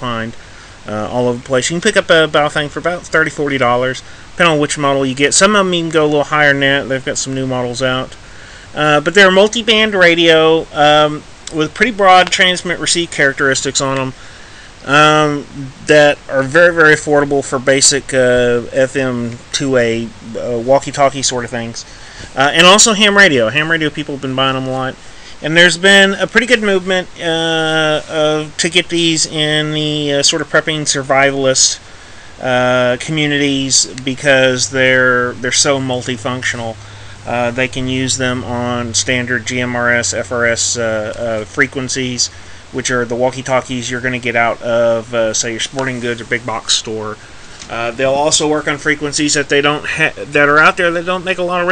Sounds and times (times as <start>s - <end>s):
Speech: 0.0s - 14.2s, 14.8s - 51.7s.